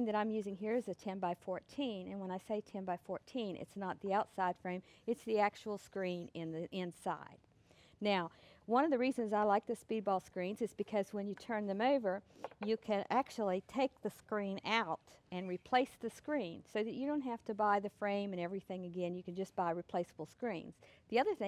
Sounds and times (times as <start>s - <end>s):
Speech: 0.0s - 7.4s, 8.0s - 21.4s.